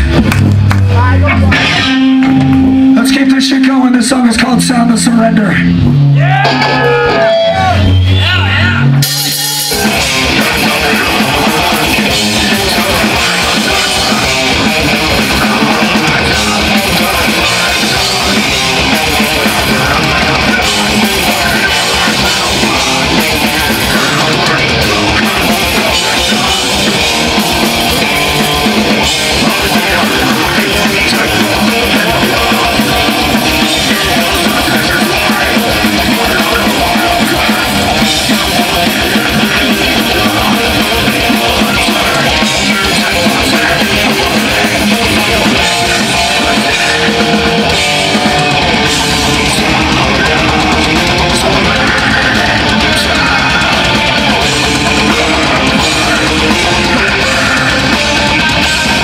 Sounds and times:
Music: 0.0s - 59.0s.

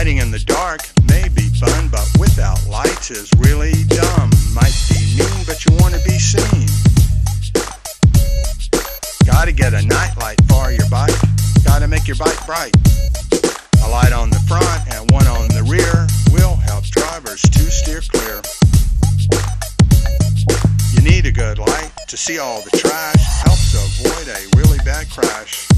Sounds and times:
Music: 0.0s - 25.7s.

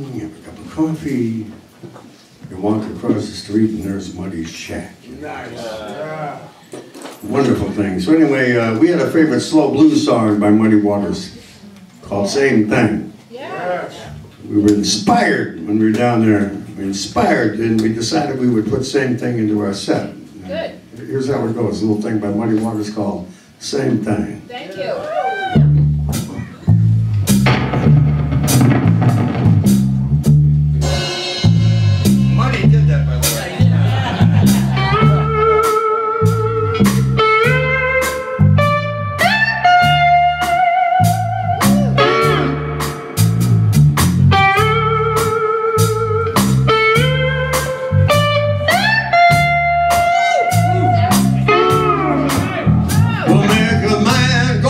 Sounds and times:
Speech: 0.0s - 1.6s, 2.5s - 6.6s, 7.2s - 25.1s, 32.4s - 33.8s, 52.3s - 54.7s
Music: 25.3s - 54.7s.

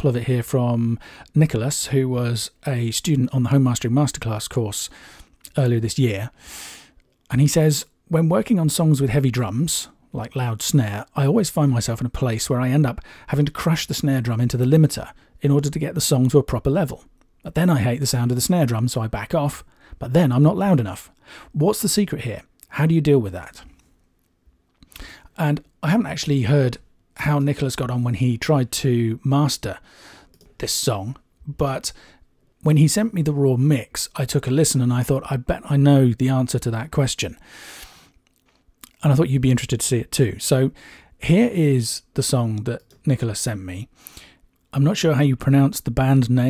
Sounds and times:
Speech: 0.0s - 4.9s, 5.5s - 6.4s, 7.3s - 23.8s, 25.4s - 29.8s, 30.6s - 32.0s, 32.6s - 37.4s, 38.8s - 43.9s, 44.7s - 46.4s.

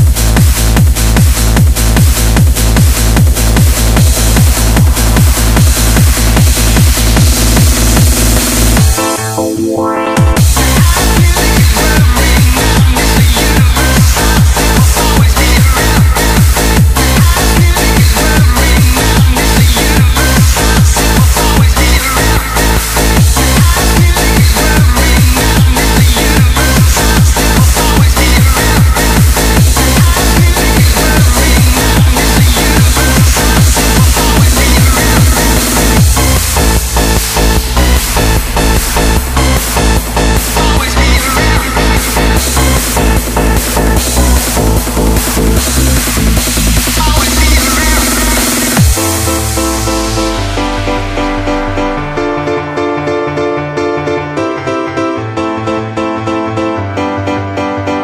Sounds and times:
Music: 0.0s - 58.0s.

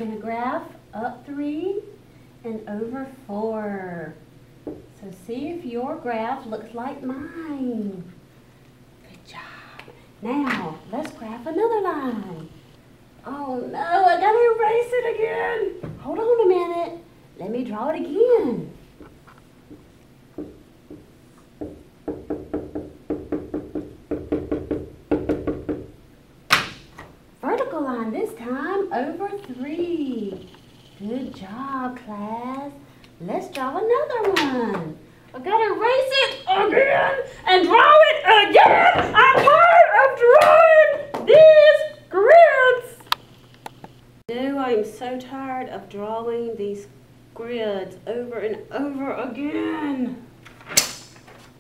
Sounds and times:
Speech: 0.0s - 4.2s, 10.2s - 12.6s, 13.2s - 18.8s, 27.4s - 43.0s, 44.3s - 50.3s.

